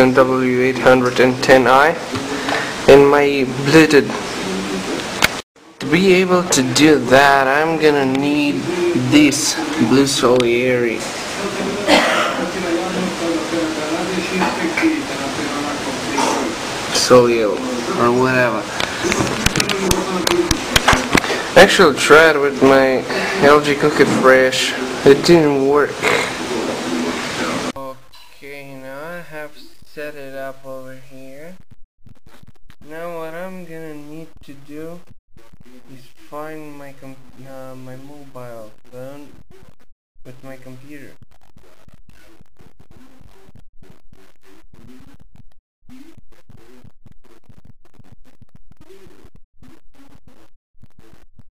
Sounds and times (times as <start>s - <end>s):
Speech: 0.0s - 2.3s, 2.9s - 5.1s, 5.8s - 20.8s, 21.5s - 31.6s, 32.8s - 35.0s, 35.8s - 39.3s, 40.3s - 41.2s.